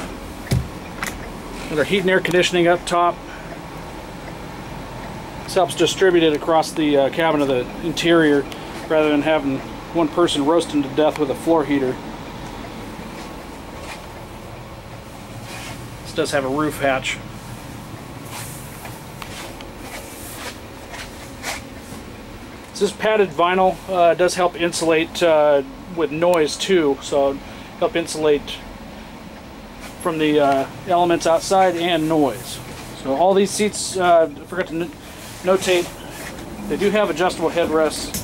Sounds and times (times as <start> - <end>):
Bus: 0.0 - 22.8, 24.8 - 38.2
Outside, urban or manmade: 0.0 - 38.2
Speech: 1.7 - 3.2, 5.5 - 12.0, 16.0 - 17.2, 22.8 - 28.7, 30.0 - 36.0, 36.6 - 38.2.